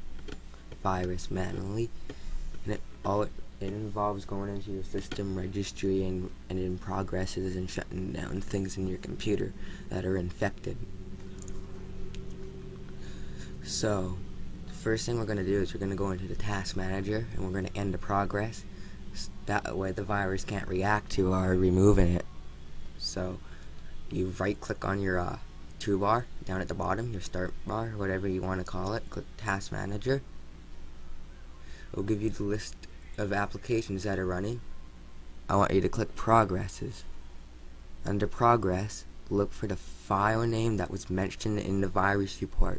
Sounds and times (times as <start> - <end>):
Speech: 0.8 - 1.9, 2.6 - 10.9, 13.6 - 22.3, 23.0 - 23.5, 24.1 - 30.3, 31.7 - 34.7, 35.5 - 37.1, 38.0 - 42.7.